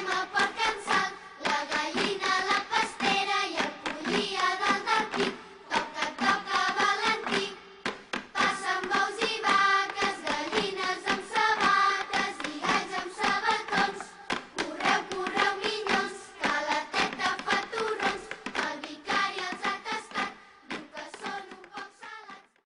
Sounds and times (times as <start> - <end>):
Music: 0.0 - 22.6.